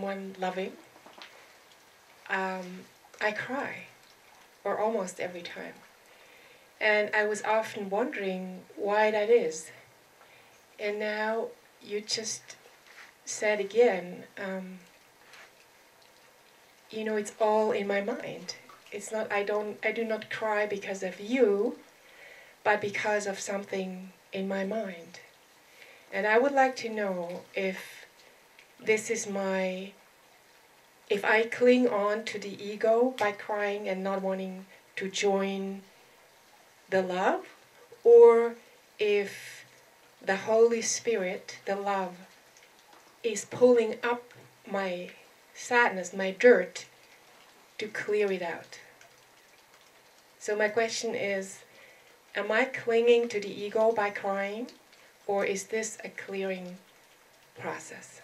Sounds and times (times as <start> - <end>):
Speech: 0.0 - 0.8, 2.3 - 3.9, 4.7 - 5.8, 6.8 - 9.8, 10.8 - 12.5, 13.3 - 14.8, 16.9 - 21.8, 22.7 - 25.2, 26.1 - 28.0, 28.8 - 30.0, 31.1 - 35.8, 36.9 - 37.5, 38.1 - 39.6, 40.2 - 42.2, 43.3 - 46.8, 47.8 - 48.8, 50.4 - 51.6, 52.4 - 54.7, 55.3 - 56.8, 57.6 - 58.2.